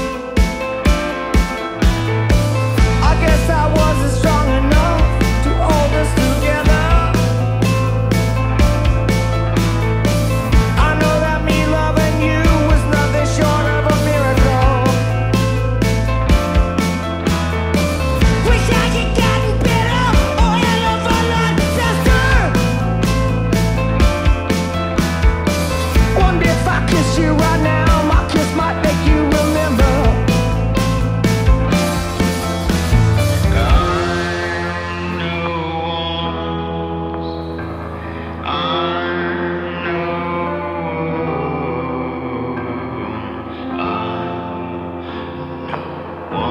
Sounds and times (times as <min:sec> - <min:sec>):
Rhythm and blues: 0:00.0 - 0:39.3.